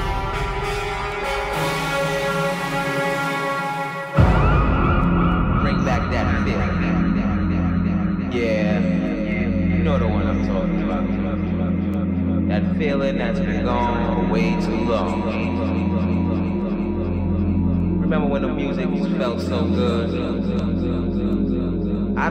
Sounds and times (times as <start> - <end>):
Speech: 5.6 - 17.0, 17.8 - 22.3.